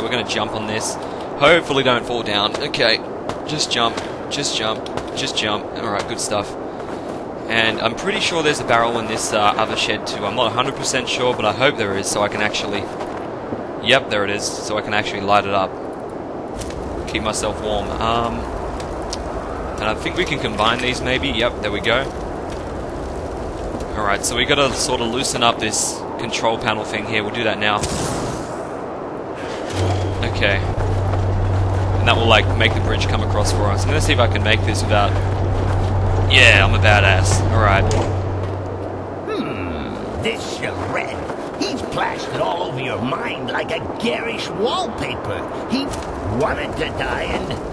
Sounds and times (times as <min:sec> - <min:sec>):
Speech: 0:00.0 - 0:06.6, 0:07.5 - 0:12.9, 0:13.8 - 0:15.7, 0:17.1 - 0:18.5, 0:19.8 - 0:22.1, 0:23.9 - 0:27.8, 0:30.2 - 0:30.8, 0:32.0 - 0:35.3, 0:36.3 - 0:38.1, 0:39.3 - 0:47.6.